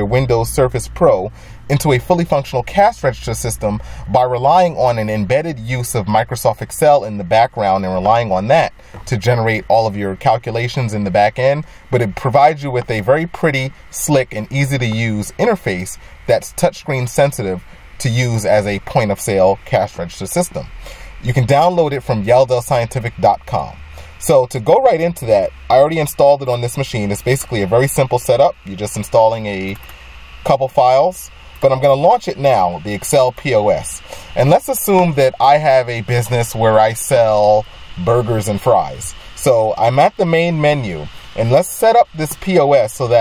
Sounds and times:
Speech: 0:00.0 - 0:29.8, 0:30.5 - 0:43.2.

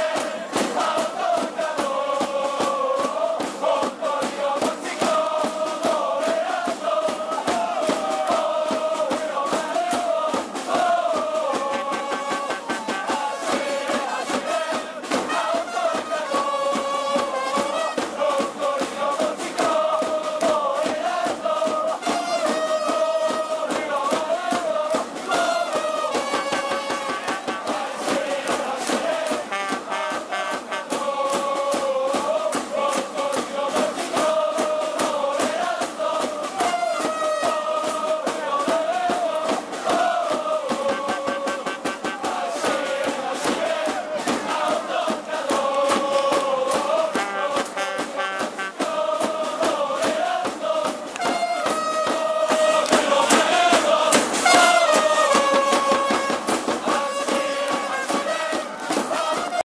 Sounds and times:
Music: 0:00.0 - 0:59.6.

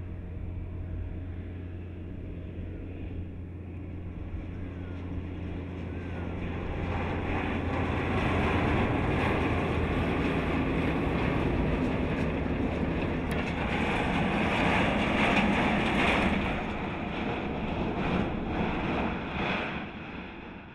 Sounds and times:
Truck: 0:00.0 - 0:20.7.

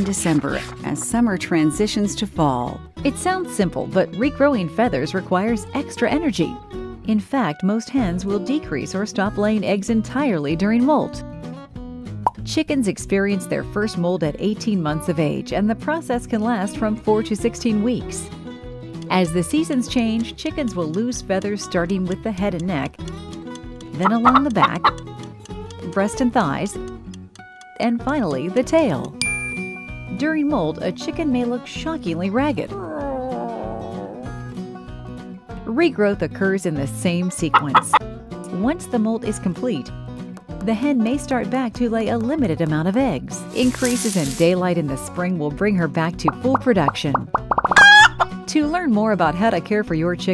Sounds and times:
Speech: 0:00.0 - 0:11.2, 0:12.4 - 0:18.3, 0:19.1 - 0:23.0, 0:24.0 - 0:24.8, 0:25.9 - 0:26.8, 0:27.8 - 0:29.2, 0:30.1 - 0:34.2, 0:35.7 - 0:39.9, 0:40.6 - 0:47.3, 0:48.5 - 0:50.3
Music: 0:00.0 - 0:50.3
Plop: 0:46.3 - 0:47.8.

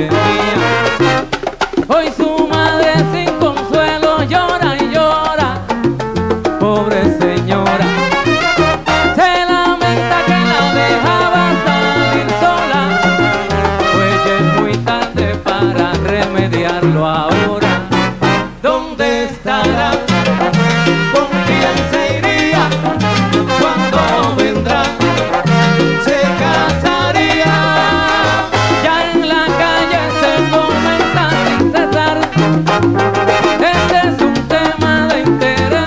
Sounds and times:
Music: 0:00.0 - 0:35.8.

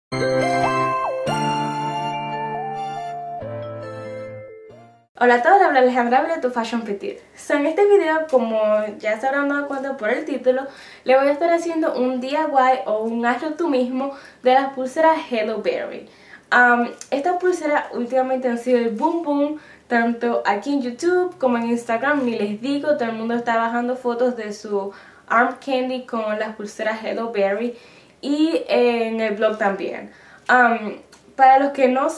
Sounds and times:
Music: 0:00.1 - 0:05.1
Inside, small room: 0:04.7 - 0:32.1
Speech: 0:05.2 - 0:32.1.

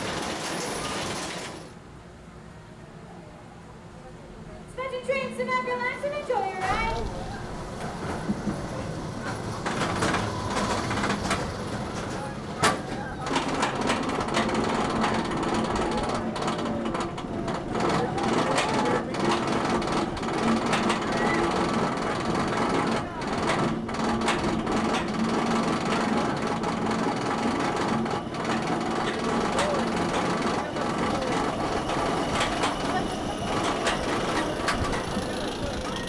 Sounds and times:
Rail transport: 0:00.0 - 0:36.0.

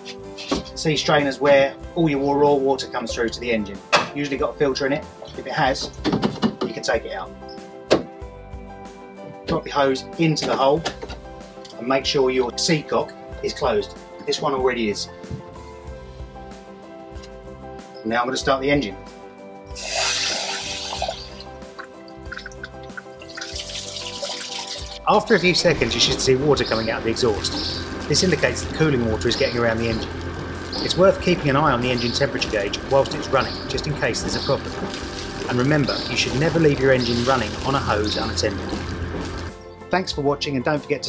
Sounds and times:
Music: 0:00.0 - 0:41.0
Speech: 0:00.4 - 0:05.9, 0:06.7 - 0:07.3, 0:09.5 - 0:10.8, 0:11.7 - 0:15.1, 0:18.0 - 0:19.0, 0:25.1 - 0:30.1, 0:30.8 - 0:34.7, 0:35.5 - 0:38.6, 0:39.9 - 0:41.0.

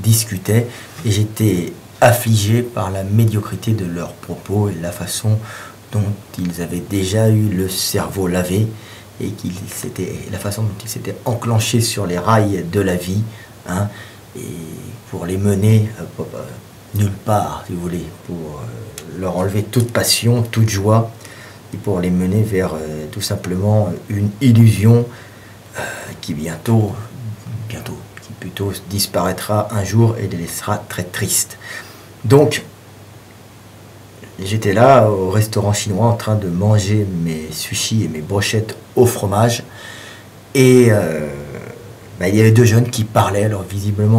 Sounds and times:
Speech: 0:00.0 - 0:25.2, 0:25.8 - 0:31.6, 0:32.2 - 0:32.7, 0:34.2 - 0:39.7, 0:40.5 - 0:44.1.

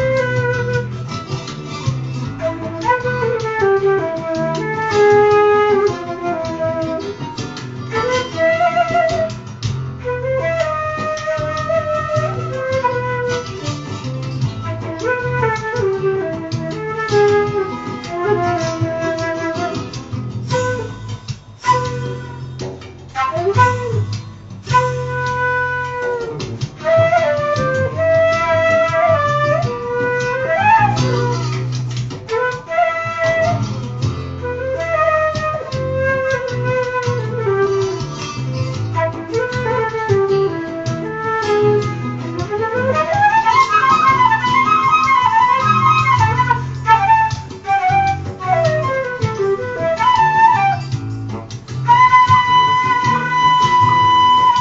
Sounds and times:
Flute: 0:00.0 - 0:54.6.

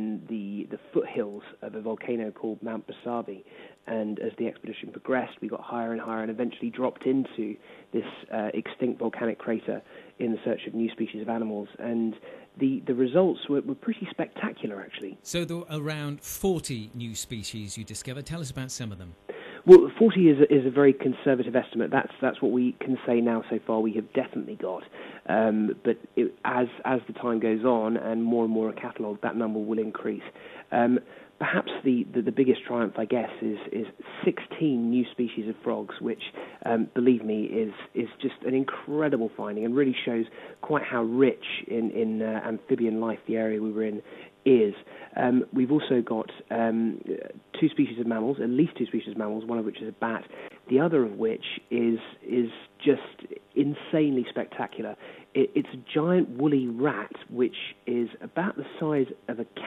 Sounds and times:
Speech: 0:00.0 - 0:59.6.

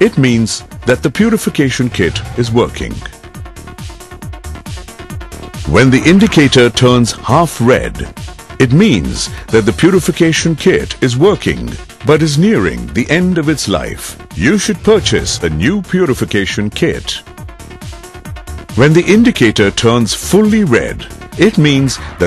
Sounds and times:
Speech: 0:00.0 - 0:03.2, 0:05.7 - 0:17.3, 0:18.8 - 0:22.2
Music: 0:00.0 - 0:22.2.

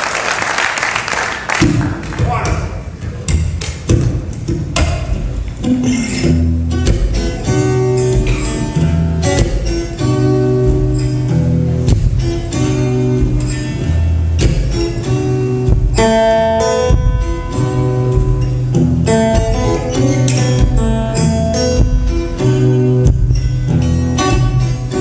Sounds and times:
Strum: 0:01.6 - 0:25.0
Electric guitar: 0:02.8 - 0:25.0.

